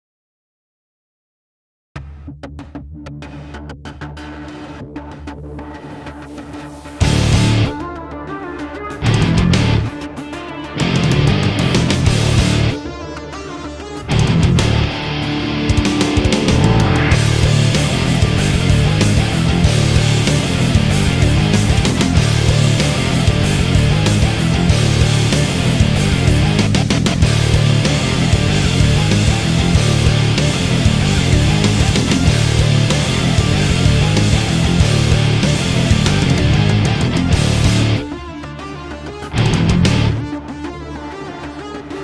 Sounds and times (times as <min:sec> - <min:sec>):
Music: 0:02.0 - 0:42.0.